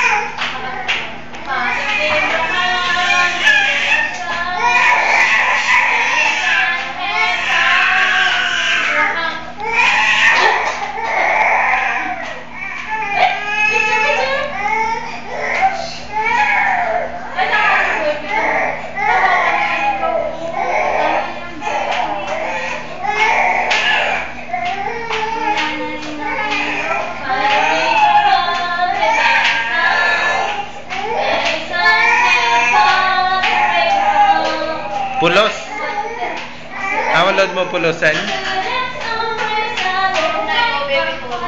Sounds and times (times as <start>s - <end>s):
Speech: 0.0s - 9.9s, 13.0s - 14.7s, 15.4s - 24.2s, 24.8s - 41.4s
Baby cry, infant cry: 0.0s - 37.5s.